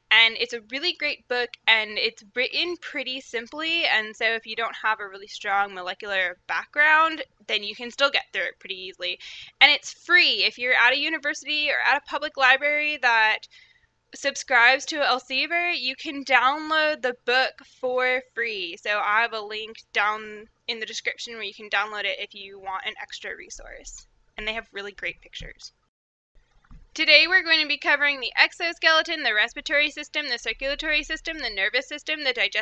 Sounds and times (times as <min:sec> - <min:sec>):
Speech: 0:00.1 - 0:13.5, 0:14.2 - 0:25.7, 0:27.0 - 0:32.6.